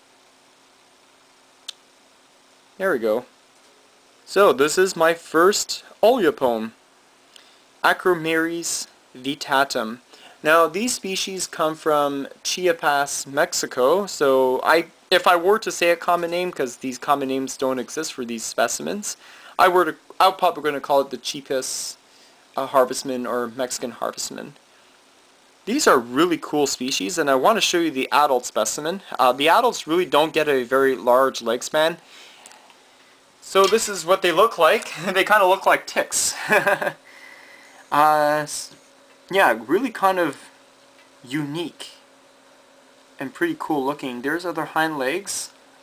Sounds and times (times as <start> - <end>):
Inside, small room: 0.0 - 45.8
Speech: 2.8 - 3.3, 4.2 - 6.8, 7.8 - 22.0, 22.6 - 24.6, 25.6 - 32.0, 33.4 - 37.0, 37.9 - 40.6, 41.2 - 42.1, 43.2 - 45.6.